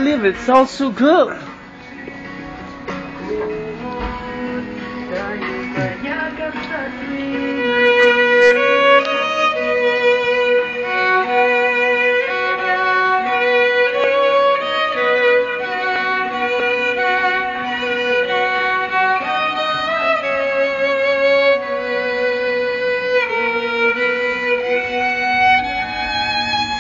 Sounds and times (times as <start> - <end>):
Speech: 0.0 - 1.5
Violin, fiddle: 2.8 - 26.8.